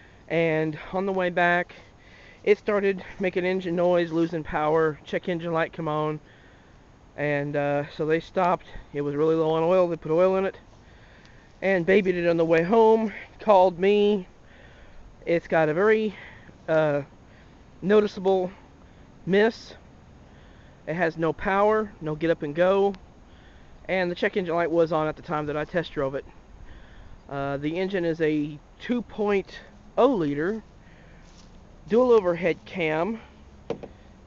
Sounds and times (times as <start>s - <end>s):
Speech: 0.3s - 1.8s, 2.5s - 6.2s, 7.2s - 10.6s, 11.6s - 14.3s, 15.2s - 17.1s, 17.8s - 18.6s, 19.3s - 19.8s, 20.9s - 23.0s, 23.9s - 26.3s, 27.3s - 30.6s, 31.9s - 33.3s.